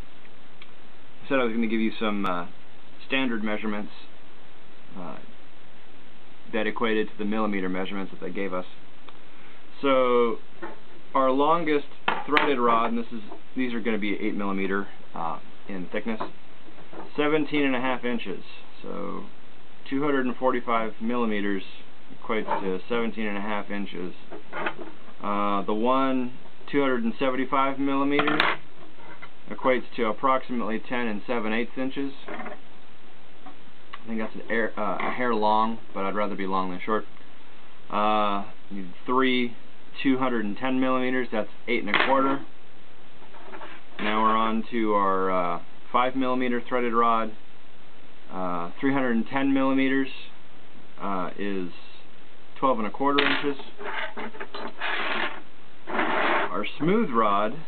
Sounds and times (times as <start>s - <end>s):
Speech: 1.2s - 4.2s, 4.9s - 5.3s, 6.5s - 8.8s, 9.7s - 10.4s, 11.1s - 16.4s, 17.0s - 24.3s, 25.2s - 28.6s, 29.5s - 32.4s, 34.0s - 37.1s, 37.9s - 42.5s, 44.0s - 47.4s, 48.3s - 50.4s, 51.0s - 54.4s, 56.4s - 57.6s.